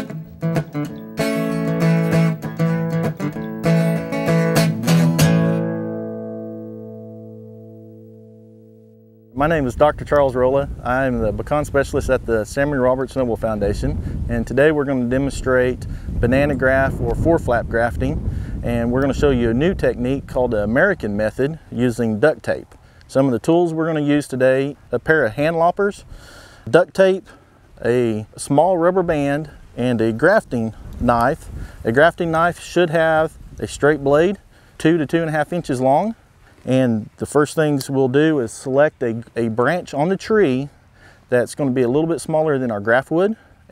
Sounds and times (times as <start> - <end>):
Speech: 9.4 - 26.0, 26.7 - 43.7.